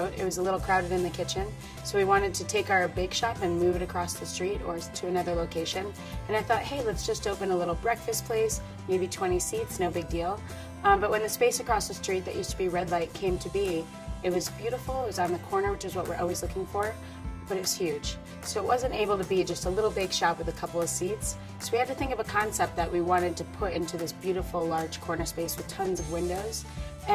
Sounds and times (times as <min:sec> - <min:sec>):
Music: 0:00.0 - 0:27.1
Speech: 0:00.0 - 0:27.1.